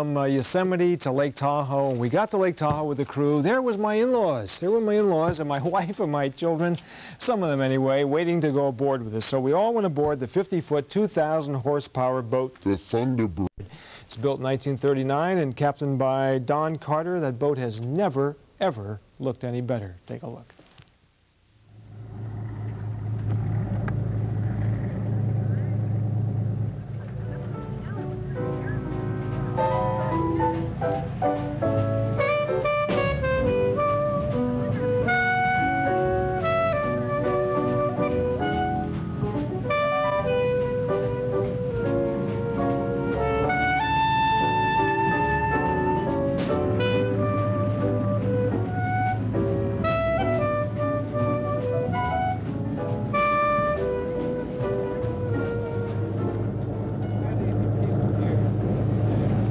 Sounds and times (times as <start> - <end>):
Vehicle: 21.8 - 44.5, 53.2 - 59.5
Music: 26.6 - 59.4.